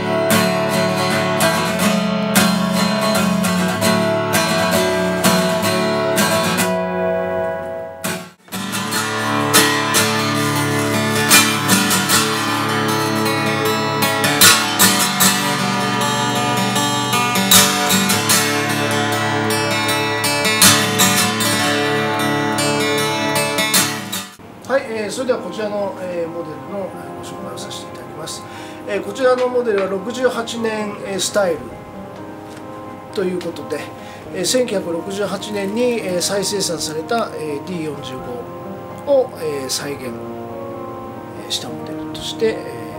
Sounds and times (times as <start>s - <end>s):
Acoustic guitar: 0.0s - 42.9s
Speech: 24.7s - 31.8s, 33.1s - 38.5s, 39.1s - 40.2s, 41.4s - 42.9s.